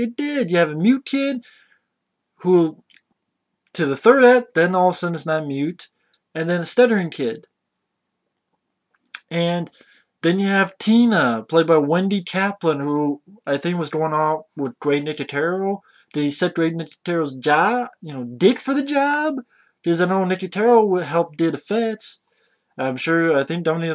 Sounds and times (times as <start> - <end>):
Speech: 0.0 - 1.5, 2.4 - 3.0, 3.7 - 7.5, 9.2 - 22.2, 22.8 - 23.9
Inside, small room: 0.0 - 23.9.